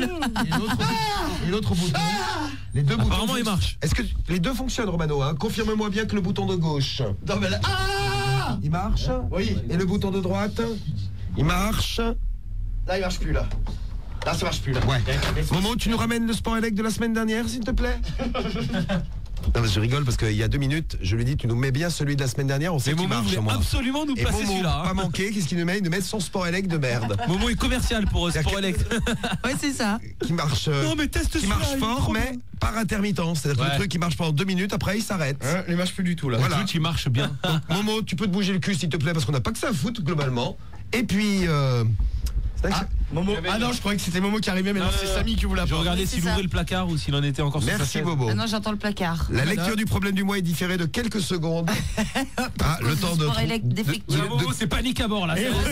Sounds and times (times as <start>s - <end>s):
Speech: 0.0s - 12.2s, 14.2s - 18.0s, 19.5s - 42.0s, 42.6s - 51.6s, 52.6s - 55.7s.